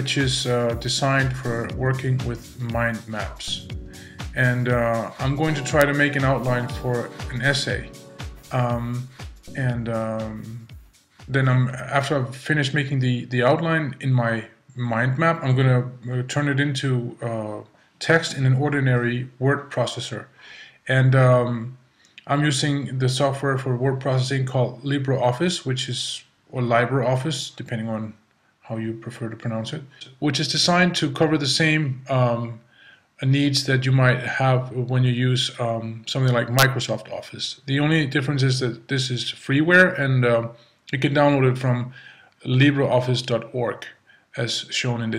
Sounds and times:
Speech: 0:00.0 - 0:03.7, 0:04.3 - 0:10.7, 0:11.3 - 0:45.1.

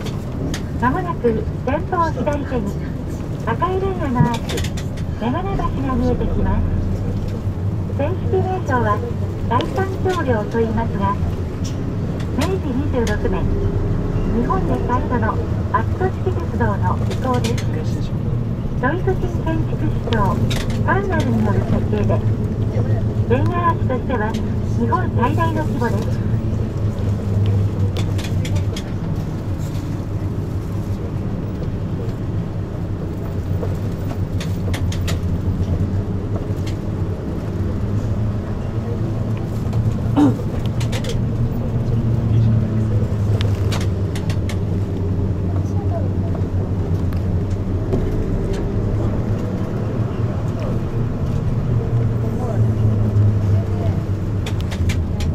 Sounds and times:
Vehicle: 0:00.0 - 0:55.3
Speech: 0:00.8 - 0:04.6, 0:05.2 - 0:06.8, 0:08.0 - 0:11.3, 0:12.4 - 0:13.6, 0:14.3 - 0:18.2, 0:18.8 - 0:26.4, 0:45.5 - 0:46.5, 0:51.8 - 0:52.8.

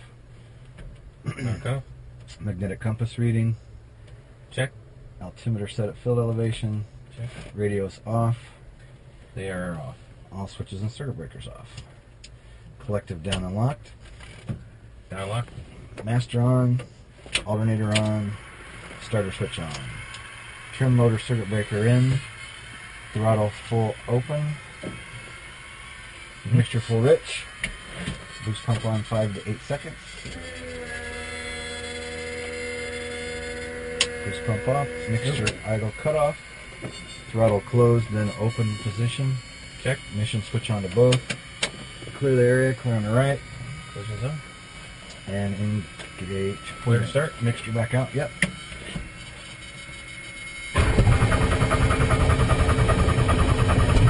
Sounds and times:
Speech: 0:01.4 - 0:03.6, 0:04.5 - 0:08.6, 0:09.4 - 0:11.8, 0:12.8 - 0:13.8, 0:15.1 - 0:18.4, 0:19.0 - 0:20.0, 0:20.8 - 0:22.3, 0:23.2 - 0:24.6, 0:26.5 - 0:27.5, 0:28.4 - 0:30.0, 0:34.2 - 0:36.4, 0:37.3 - 0:41.3, 0:42.2 - 0:43.4, 0:44.0 - 0:44.4, 0:45.3 - 0:48.4.

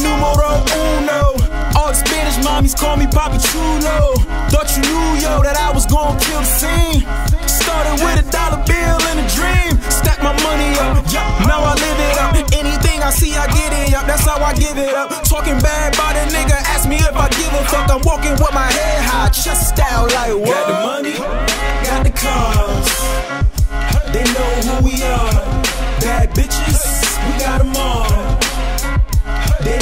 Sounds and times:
Rhythm and blues: 0:00.0 - 0:29.8.

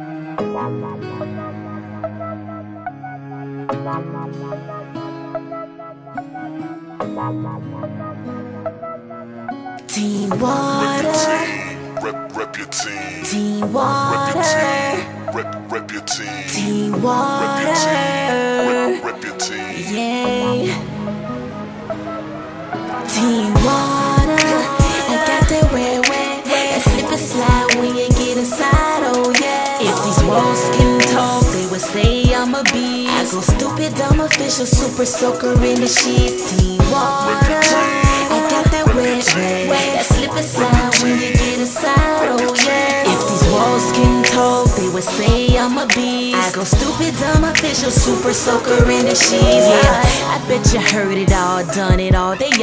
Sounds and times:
Music: 0:00.0 - 0:52.6.

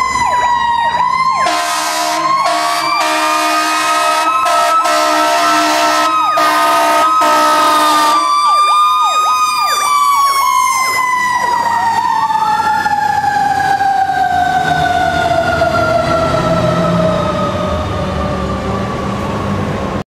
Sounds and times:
Vehicle: 0:00.0 - 0:20.0
Accelerating, revving, vroom: 0:13.3 - 0:20.0.

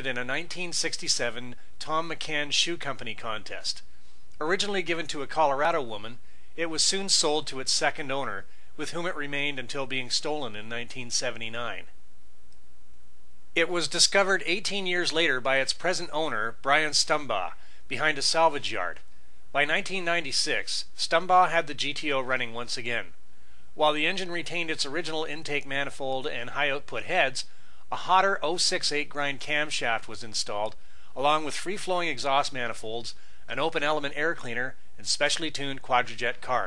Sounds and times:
Speech: 0:00.0 - 0:11.9, 0:13.6 - 0:19.0, 0:19.6 - 0:23.2, 0:23.8 - 0:36.6.

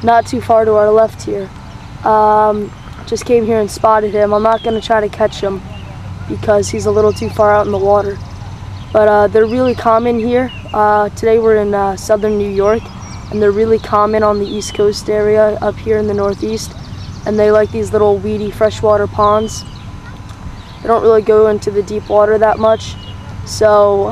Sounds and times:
Speech: 0:00.0 - 0:01.5, 0:02.1 - 0:08.2, 0:09.0 - 0:19.6, 0:20.8 - 0:24.1.

